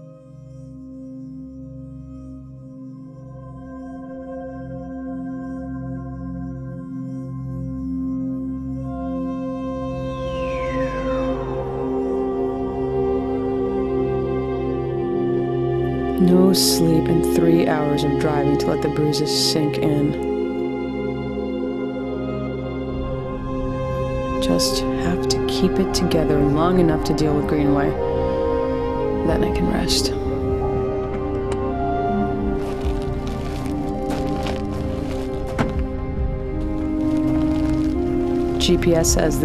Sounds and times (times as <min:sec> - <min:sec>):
Music: 0:00.0 - 0:39.4
Speech: 0:16.2 - 0:20.2, 0:24.4 - 0:28.0, 0:29.2 - 0:30.2, 0:38.6 - 0:39.4.